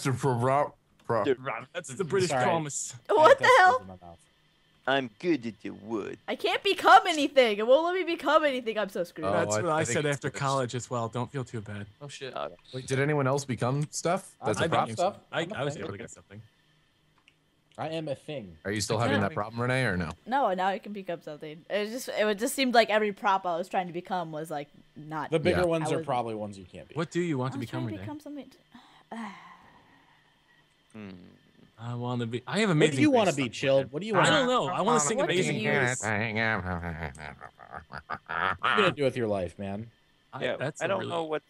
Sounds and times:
Speech: 0.0 - 4.1, 9.2 - 11.9, 12.7 - 16.4, 17.8 - 20.6, 25.4 - 28.2, 31.8 - 36.6, 38.7 - 41.4.

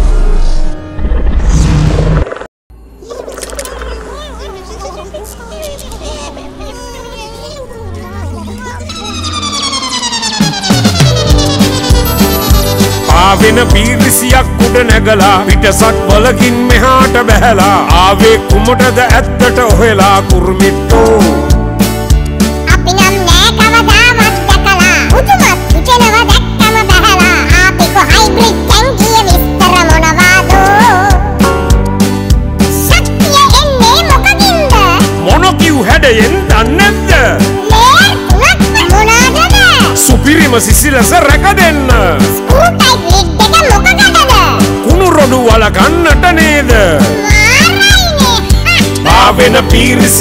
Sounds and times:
Music: 6.0 - 50.2.

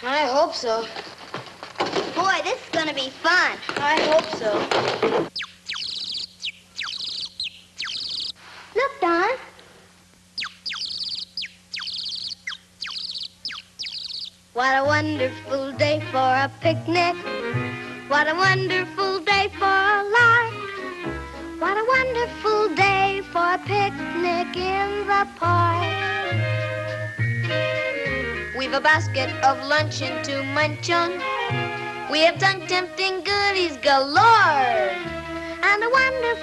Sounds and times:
Speech: 0.0 - 1.0, 2.2 - 4.7, 8.8 - 9.6.

